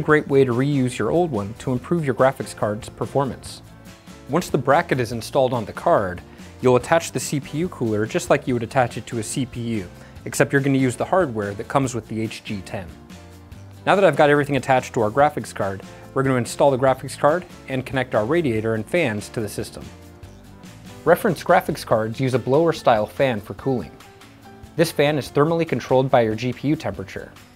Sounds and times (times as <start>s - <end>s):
Speech: 0.0s - 3.6s, 4.3s - 13.0s, 13.8s - 19.9s, 21.0s - 24.0s, 24.8s - 27.4s
Music: 0.0s - 27.5s.